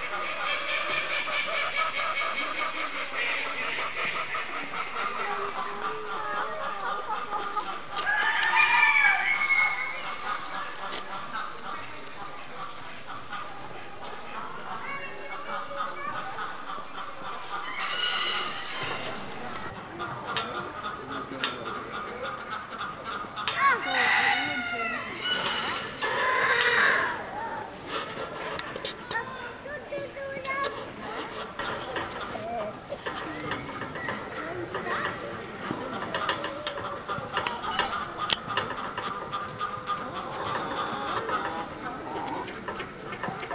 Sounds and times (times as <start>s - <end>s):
Chicken, rooster: 0.0s - 43.5s
Bird: 9.2s - 43.5s
Speech: 18.8s - 26.3s, 26.9s - 38.5s.